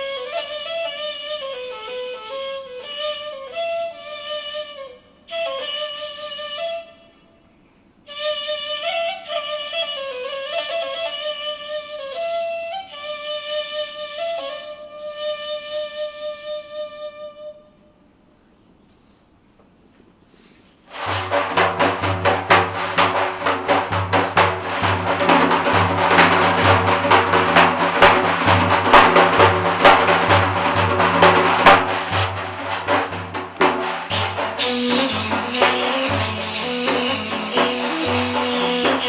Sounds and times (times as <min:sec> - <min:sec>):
Inside, large room or hall: 0:00.0 - 0:39.0.